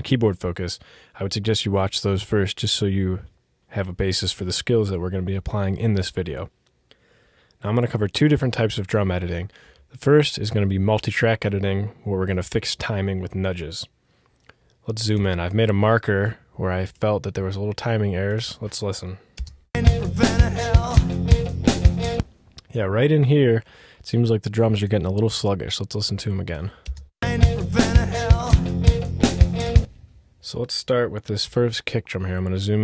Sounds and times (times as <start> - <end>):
Speech: 0.0 - 6.5, 7.6 - 13.9, 14.8 - 19.2, 22.6 - 26.8, 30.4 - 32.8
Bass drum: 19.8 - 22.2, 27.2 - 30.0
Drum kit: 19.8 - 22.3, 27.2 - 30.0.